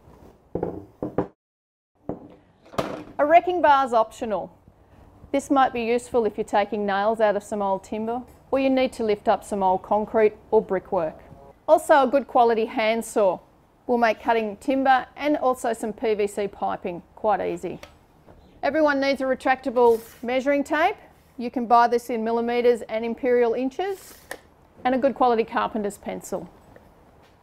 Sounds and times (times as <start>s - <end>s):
Speech: 5.4s - 17.8s, 18.7s - 24.0s, 24.8s - 26.5s.